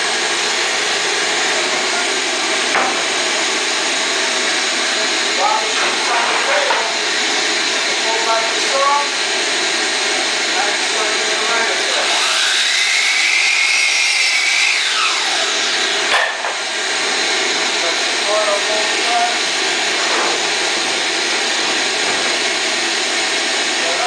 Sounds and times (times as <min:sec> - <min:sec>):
Wood: 0:02.6 - 0:07.1.